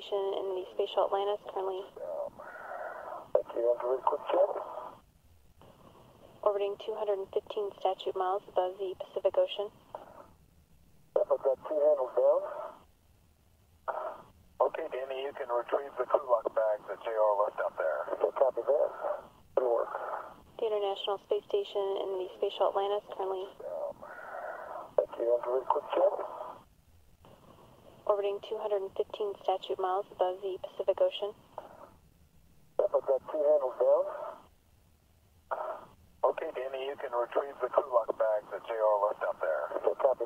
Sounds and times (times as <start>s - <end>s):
Speech: 20.6s - 24.0s, 36.3s - 40.2s.